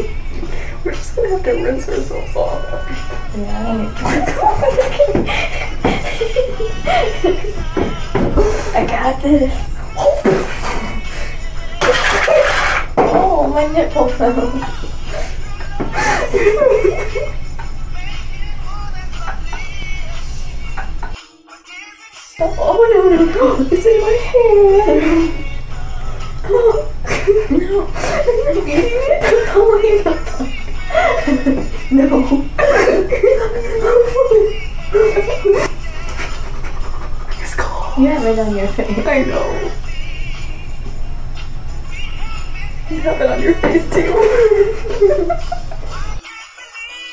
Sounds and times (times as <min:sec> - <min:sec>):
Music: 0:00.0 - 0:47.1.